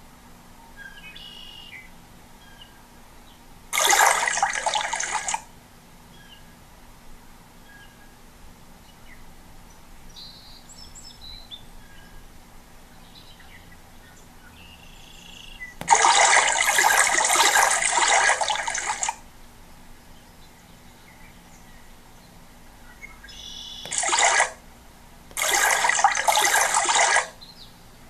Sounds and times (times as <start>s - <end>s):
Liquid: 3.7s - 5.5s, 15.8s - 19.3s, 23.9s - 24.7s, 25.3s - 27.4s.